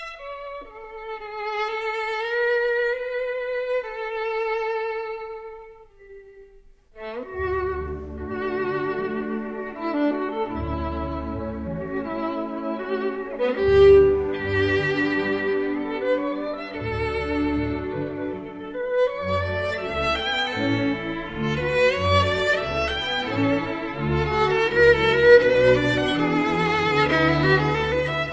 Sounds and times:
Violin, fiddle: 0.0 - 28.3.

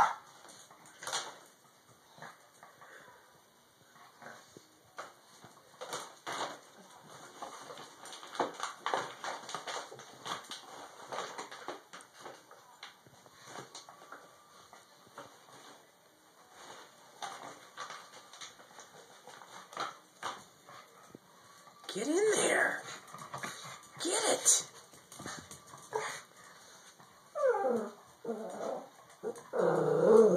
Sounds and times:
Speech: 21.8 - 22.9, 24.0 - 24.7.

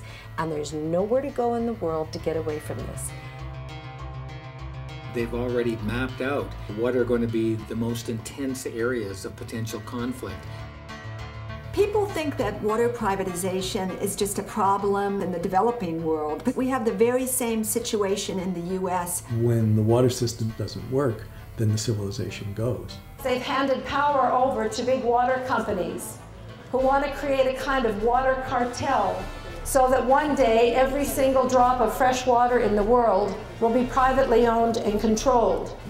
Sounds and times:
Music: 0.0 - 35.8.

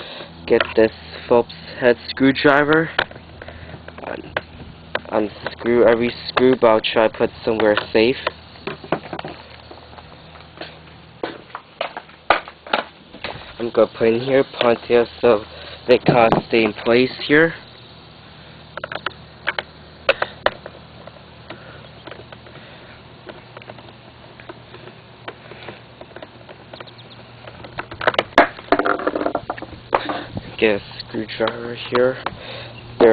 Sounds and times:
Speech: 0.5 - 2.9, 5.1 - 8.3, 13.6 - 17.6, 30.6 - 32.3.

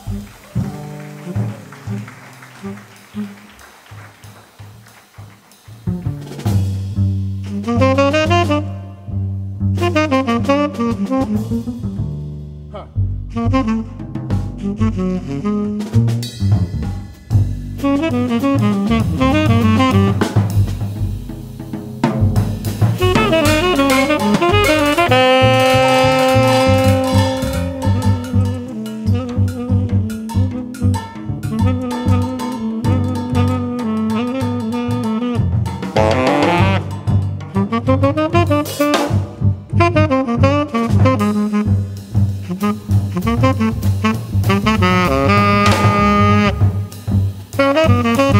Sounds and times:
Saxophone: 0.0 - 4.4, 7.5 - 12.0, 12.8 - 16.3, 17.8 - 20.7, 22.9 - 48.3
Drum: 0.0 - 48.3
Jazz: 0.0 - 48.3.

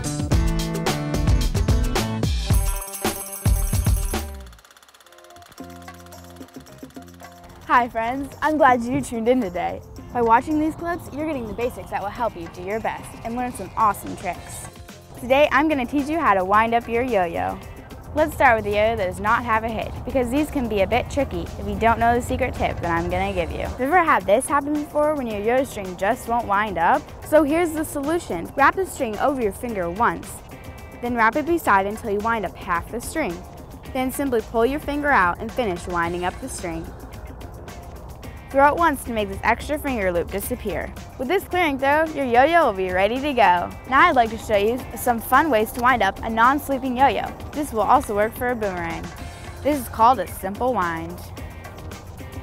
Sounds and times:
Music: 0.0 - 52.4
Speech: 7.7 - 17.6, 18.2 - 30.4, 31.0 - 36.9, 38.5 - 51.3.

